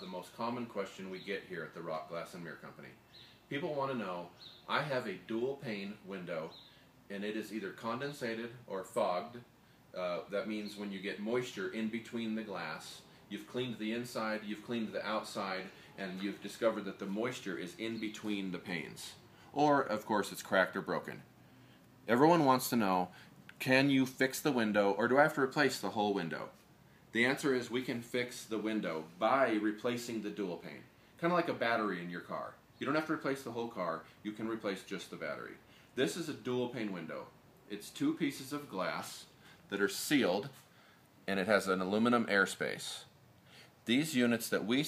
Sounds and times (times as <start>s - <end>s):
Speech: 0.0s - 21.3s, 22.1s - 40.6s, 41.3s - 43.2s, 43.8s - 44.8s.